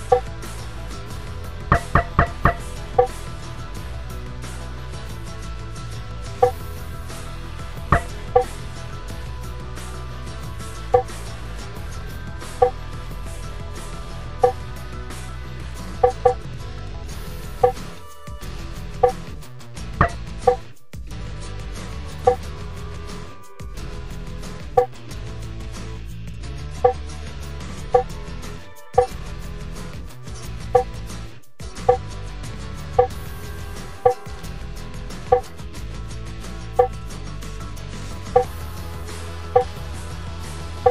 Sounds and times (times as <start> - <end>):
Music: 0.0 - 40.9.